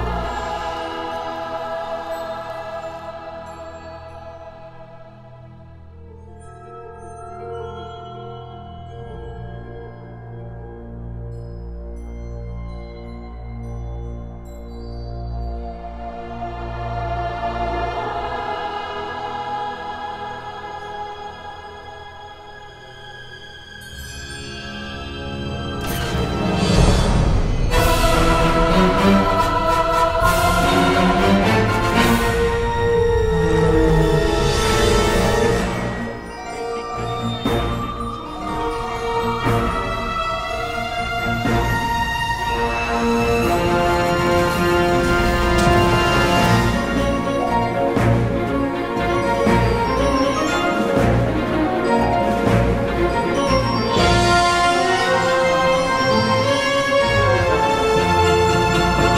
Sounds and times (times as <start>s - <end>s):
Theme music: 0.0s - 12.0s, 15.6s - 59.1s.